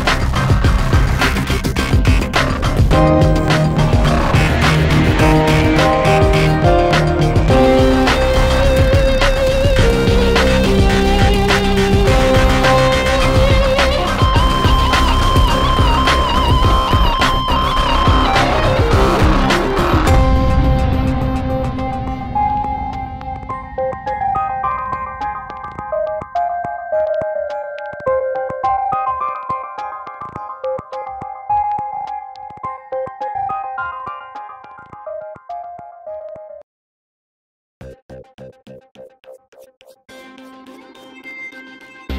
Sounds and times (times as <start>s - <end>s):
Music: 0.0s - 36.6s, 37.8s - 42.1s.